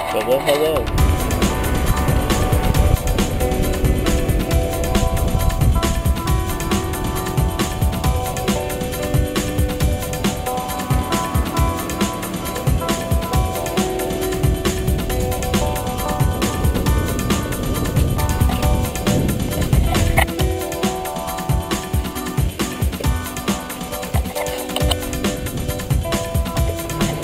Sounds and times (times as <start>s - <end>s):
Music: 0.0s - 27.2s.